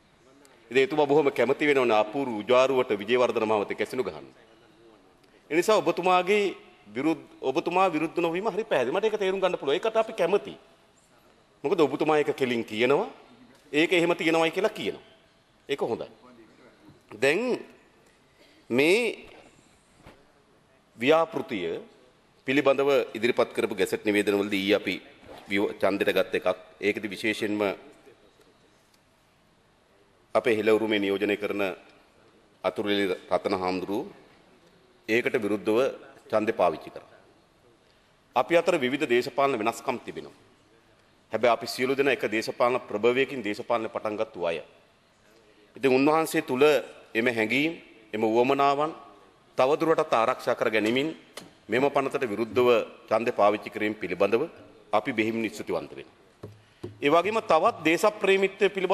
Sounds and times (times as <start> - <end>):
Narration, monologue: 0.0 - 58.9
Male speech, man speaking: 0.3 - 10.6, 11.6 - 15.1, 15.7 - 17.8, 18.7 - 19.3, 21.0 - 28.3, 30.3 - 31.9, 32.6 - 34.2, 35.0 - 37.3, 38.4 - 40.4, 41.3 - 44.7, 45.8 - 56.1, 57.0 - 58.9.